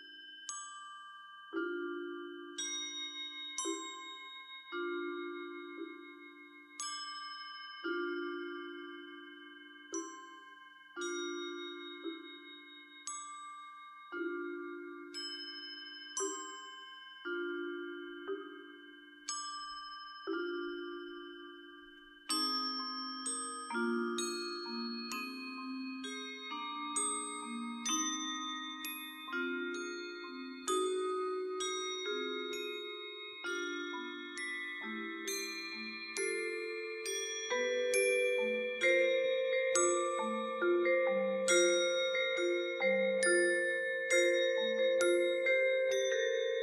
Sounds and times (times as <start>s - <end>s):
Music: 0.0s - 46.6s.